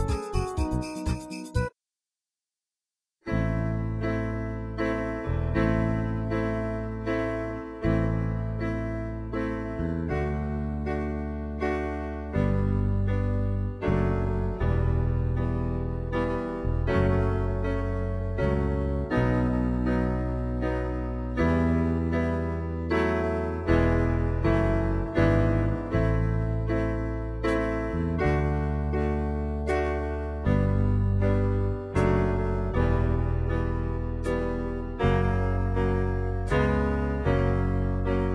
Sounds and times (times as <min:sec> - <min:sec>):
Music: 0:00.0 - 0:01.8, 0:03.2 - 0:38.3.